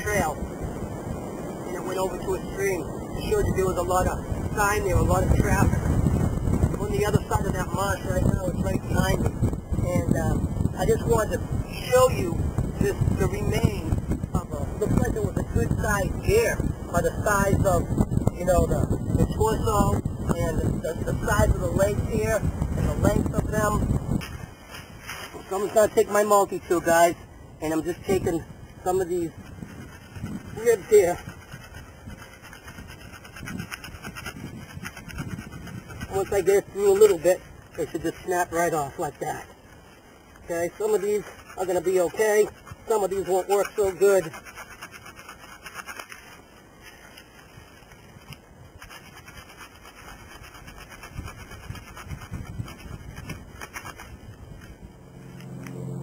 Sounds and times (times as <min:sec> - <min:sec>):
Speech: 0:00.0 - 0:00.4, 0:01.7 - 0:05.8, 0:06.8 - 0:23.8, 0:25.5 - 0:29.3, 0:30.6 - 0:31.2, 0:36.1 - 0:39.5, 0:40.5 - 0:44.4.